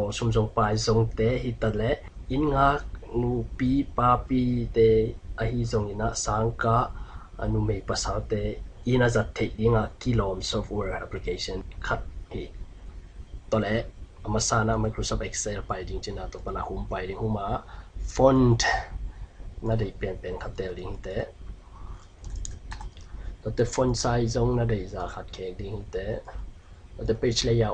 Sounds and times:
Speech: 0.0 - 12.6, 13.5 - 19.0, 19.6 - 21.4, 23.4 - 26.4, 27.0 - 27.7.

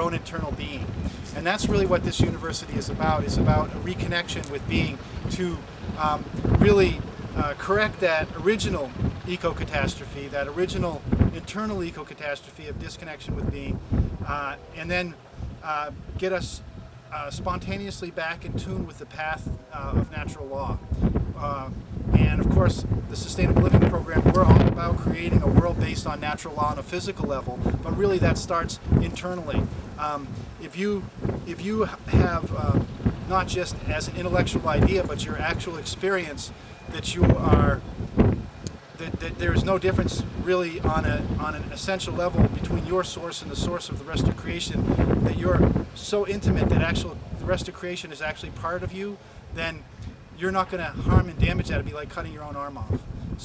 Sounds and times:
Speech: 0.0 - 16.6, 17.2 - 20.8, 21.4 - 37.8, 39.0 - 49.8, 50.4 - 53.4.

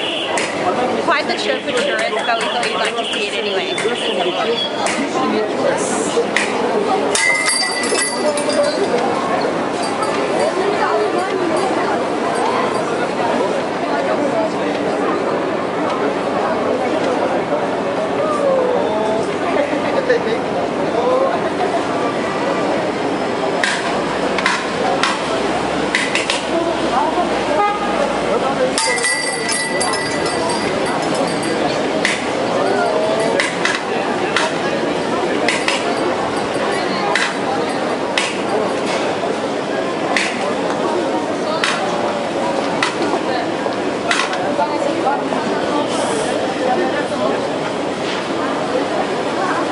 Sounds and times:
Speech: 0.0 - 49.7.

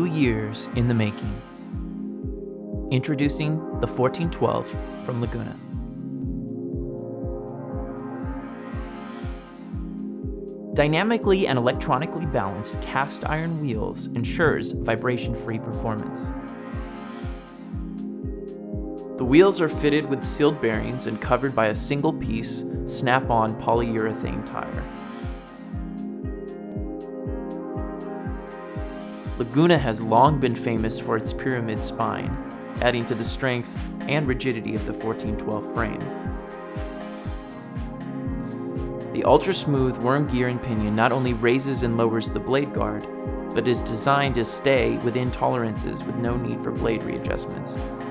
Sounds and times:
Speech: 0.0 - 1.4, 2.9 - 5.6, 10.8 - 16.3, 19.2 - 24.9, 29.4 - 36.1, 39.2 - 47.8
Music: 0.0 - 48.1.

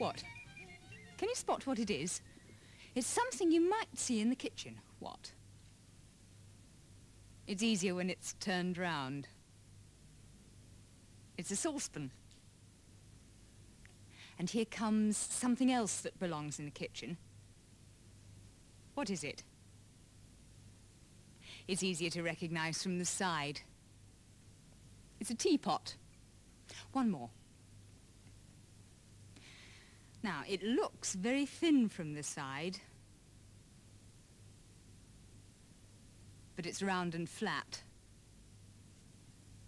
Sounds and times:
Speech: 0.0 - 0.2, 1.2 - 2.2, 3.0 - 5.4, 7.5 - 9.4, 11.4 - 12.2, 14.4 - 17.2, 19.0 - 19.5, 21.7 - 23.7, 25.2 - 26.0, 26.8 - 27.4, 30.2 - 33.0, 36.6 - 37.9.

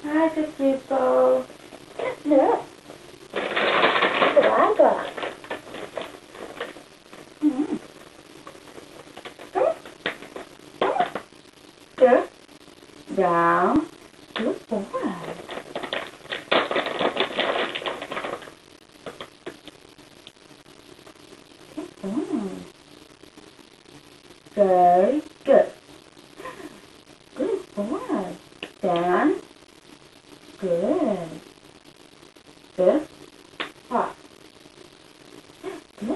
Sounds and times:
Speech: 0.0 - 2.7, 4.3 - 5.2, 12.0 - 12.3, 13.1 - 15.4, 24.6 - 25.8, 27.4 - 29.4, 30.6 - 31.4, 32.8 - 33.1, 33.9 - 34.2.

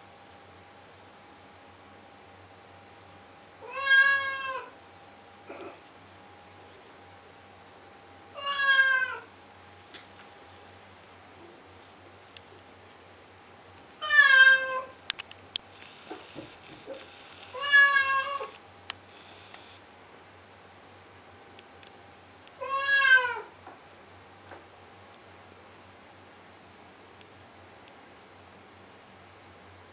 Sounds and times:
Meow: 3.6 - 4.8, 8.4 - 9.3, 14.0 - 15.0, 17.5 - 18.6, 22.6 - 23.5.

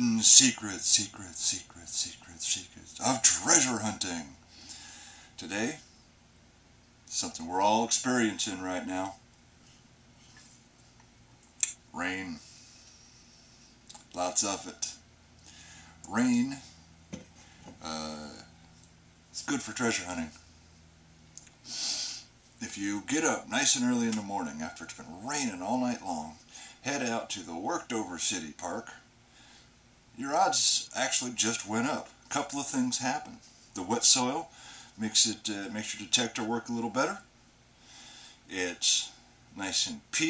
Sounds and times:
Speech: 0.0 - 4.4, 5.4 - 5.9, 7.1 - 9.2, 11.6 - 12.4, 14.2 - 15.0, 16.1 - 16.7, 17.8 - 18.5, 19.4 - 20.4, 22.6 - 29.1, 30.2 - 37.3, 38.5 - 40.3.

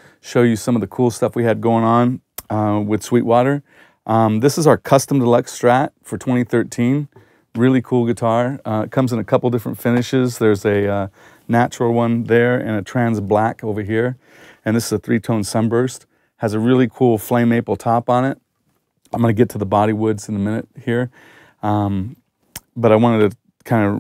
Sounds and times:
Speech: 0.2 - 18.4, 19.1 - 24.0.

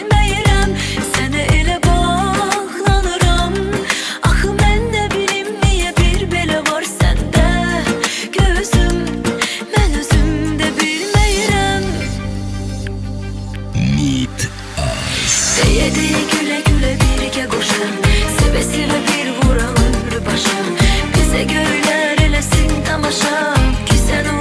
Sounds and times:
Music: 0.0 - 24.4.

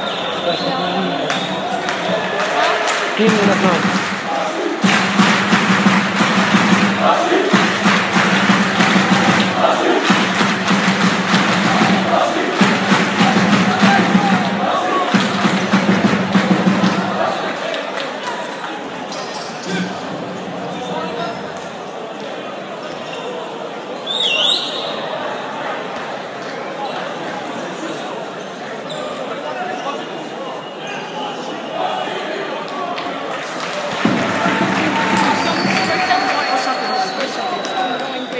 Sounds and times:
Inside, public space: 0.0 - 38.3
Speech: 0.3 - 4.7, 17.1 - 38.3.

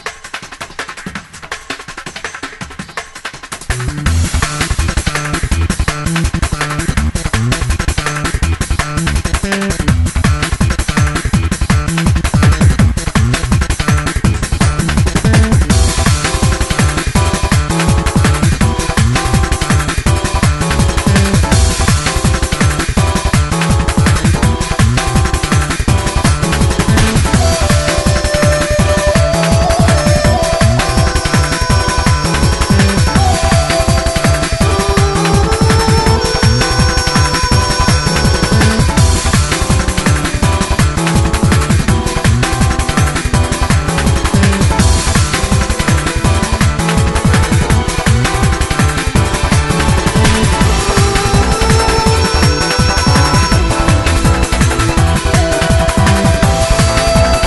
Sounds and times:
Video game music: 14.2 - 57.4
Theme music: 15.2 - 57.4.

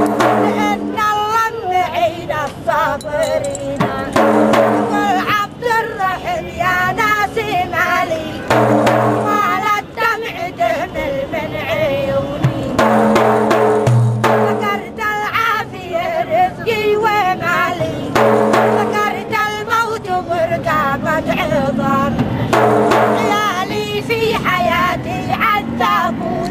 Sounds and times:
Music: 0.0 - 10.9, 11.9 - 16.1, 17.1 - 26.5.

